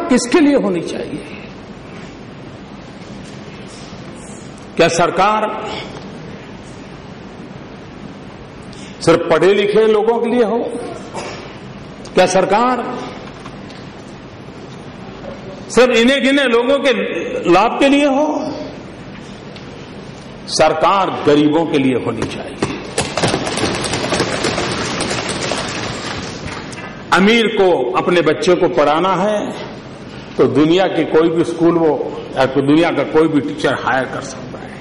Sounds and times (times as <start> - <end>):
Male speech, man speaking: 0.0 - 1.3, 4.8 - 5.7, 9.0 - 11.1, 12.2 - 13.1, 15.7 - 18.8, 20.5 - 22.6, 27.1 - 29.7, 30.4 - 34.8
Narration, monologue: 0.0 - 34.8.